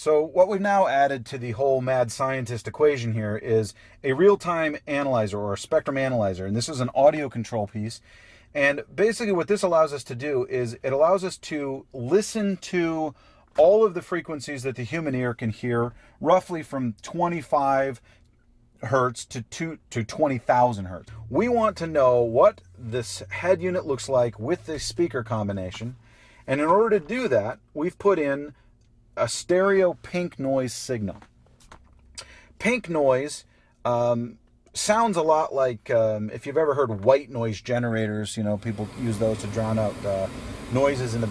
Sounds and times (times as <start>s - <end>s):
Speech: 0.0s - 8.0s, 8.6s - 18.0s, 18.8s - 28.5s, 29.2s - 31.2s, 32.6s - 41.3s.